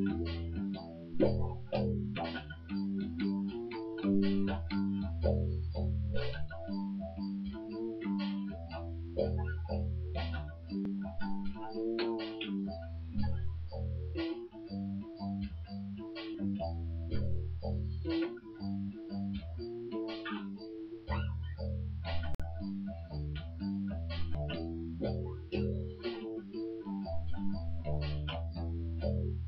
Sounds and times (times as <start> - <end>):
Music: 0.0 - 29.4.